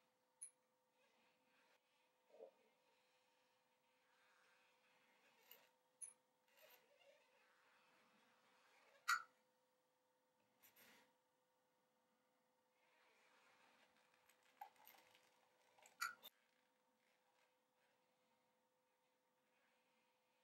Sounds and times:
Silence: 7.2s - 14.6s, 15.4s - 20.4s.

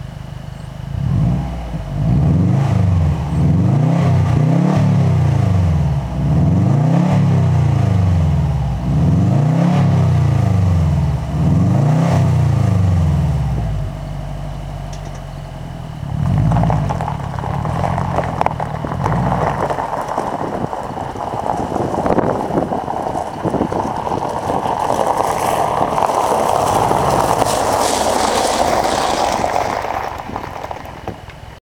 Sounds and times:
Car: 0.0s - 31.6s.

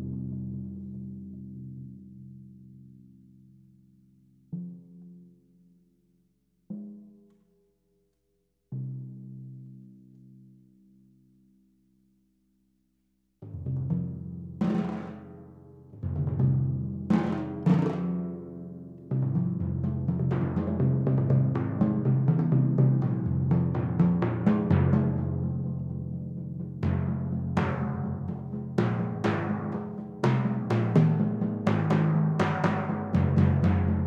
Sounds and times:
Timpani: 13.8s - 34.0s.

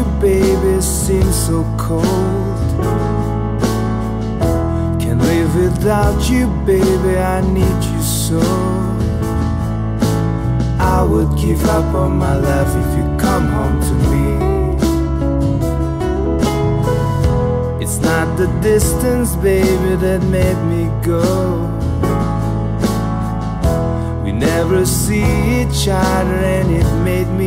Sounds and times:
Music: 0.0s - 27.4s.

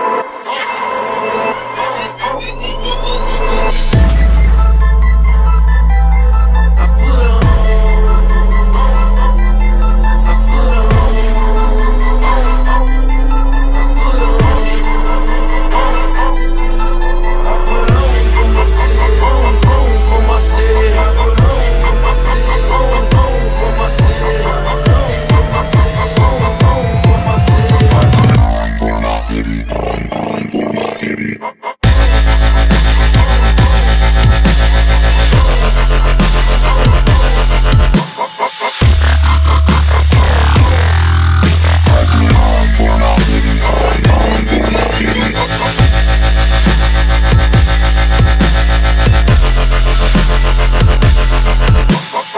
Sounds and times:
Dubstep: 0.0s - 52.3s.

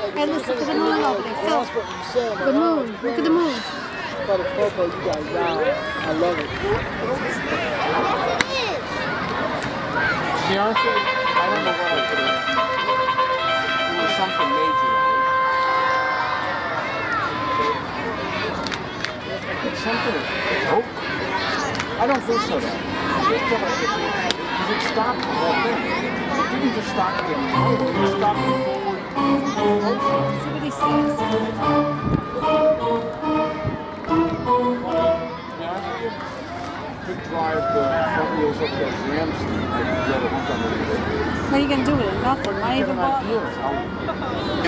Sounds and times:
Speech: 17.1s - 31.6s.

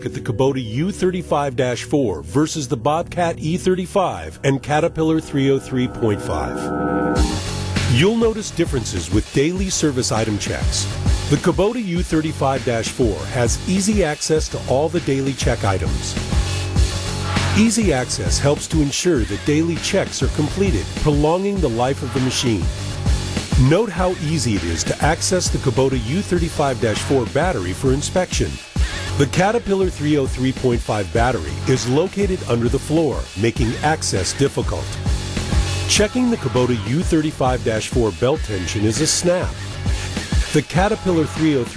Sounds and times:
Speech: 0.0s - 6.7s, 7.9s - 16.2s, 17.6s - 22.7s, 23.6s - 28.6s, 29.2s - 35.0s, 35.9s - 39.6s, 40.5s - 41.7s
Music: 0.0s - 41.7s.

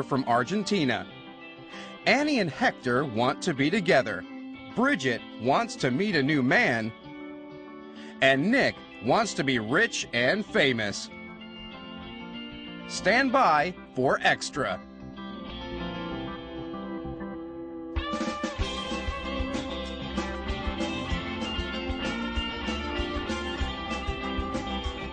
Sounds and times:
Speech: 0.0s - 1.1s, 2.0s - 4.2s, 4.8s - 6.9s, 8.2s - 11.1s, 12.9s - 14.8s
Music: 0.0s - 25.1s.

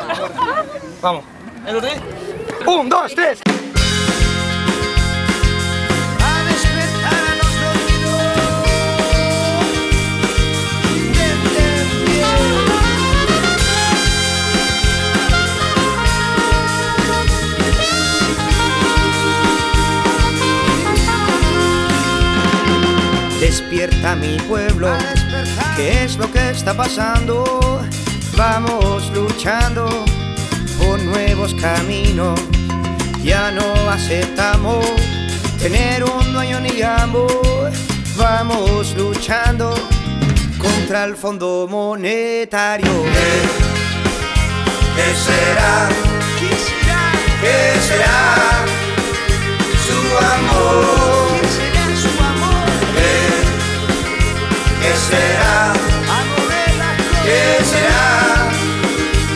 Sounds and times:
Dance music: 3.8s - 26.2s, 42.9s - 59.3s.

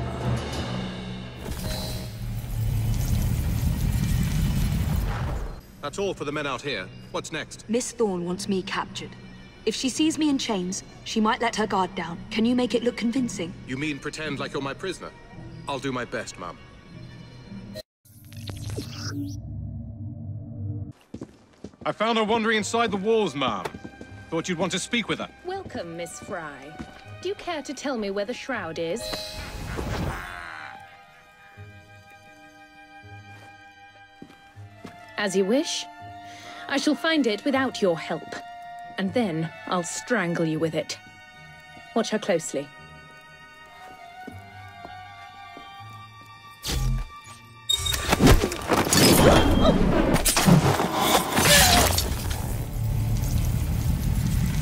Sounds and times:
Music: 0.0s - 4.5s, 5.6s - 21.0s, 21.8s - 54.6s.

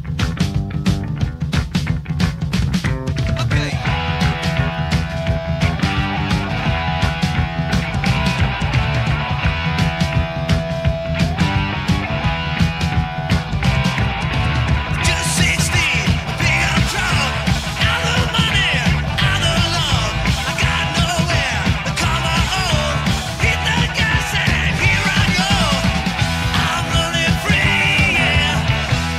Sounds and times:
Music: 0.0s - 29.1s.

